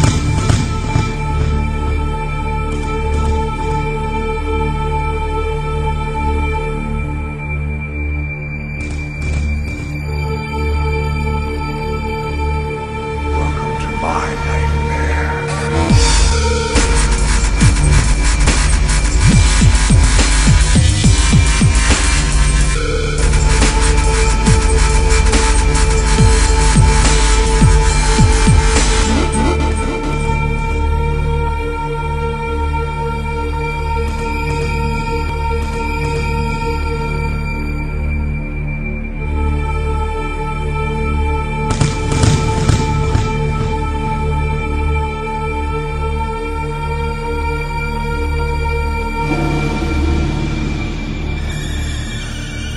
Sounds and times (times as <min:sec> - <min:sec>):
Music: 0:00.0 - 0:52.7.